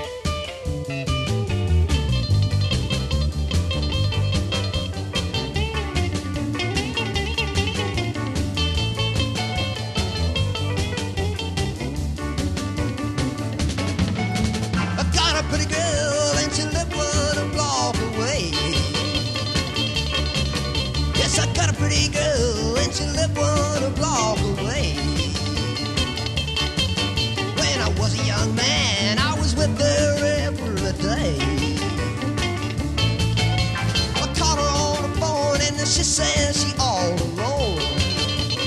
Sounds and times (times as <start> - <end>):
Swing music: 0.0 - 38.6.